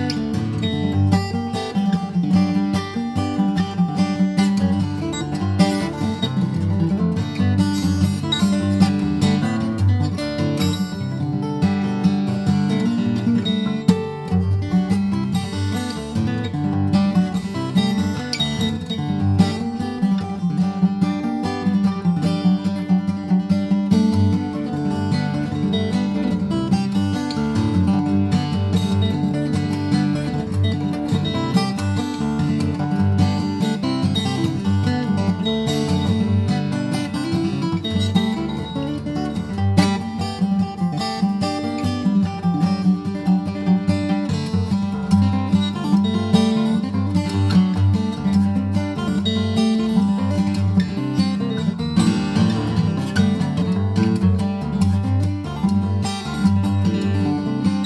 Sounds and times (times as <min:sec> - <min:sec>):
Acoustic guitar: 0:00.0 - 0:57.8.